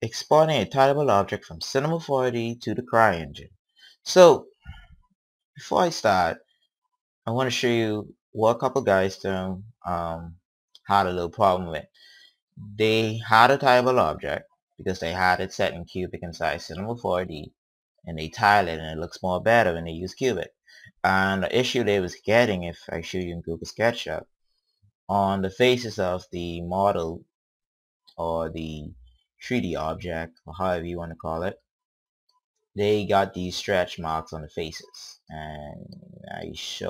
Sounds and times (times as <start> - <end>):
Speech: 0.0 - 4.5, 5.6 - 6.4, 7.3 - 11.8, 12.6 - 17.5, 18.1 - 24.2, 25.1 - 27.2, 28.2 - 31.6, 32.8 - 36.8.